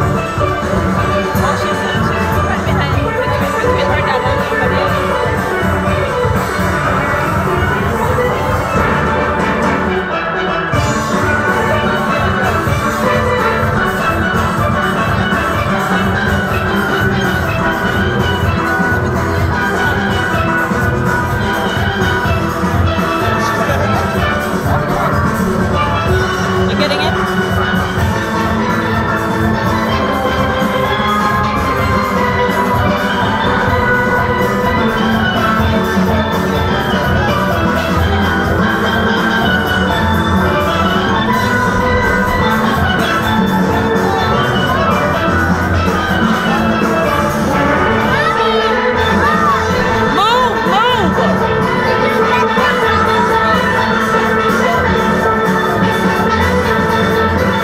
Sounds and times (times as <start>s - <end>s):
Drum: 0.0s - 57.6s
Steelpan: 0.0s - 57.6s.